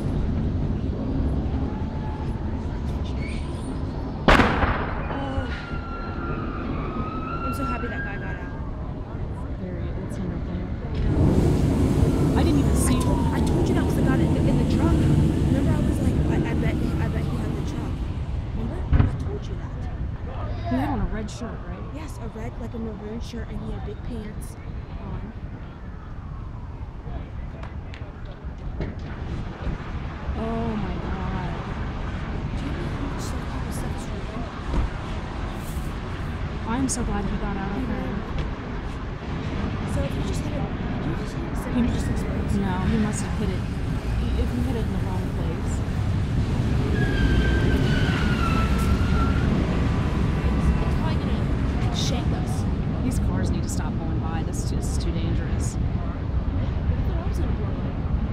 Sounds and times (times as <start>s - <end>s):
Fire engine, fire truck (siren): 0.0s - 3.2s, 5.1s - 9.3s, 11.0s - 17.7s, 25.6s - 28.4s, 46.5s - 52.0s
Speech: 5.2s - 5.6s, 7.5s - 8.6s, 9.2s - 11.2s, 12.4s - 18.0s, 18.6s - 25.4s, 30.4s - 31.8s, 32.6s - 34.5s, 36.7s - 38.3s, 39.9s - 45.8s, 50.5s - 56.0s, 56.8s - 58.0s.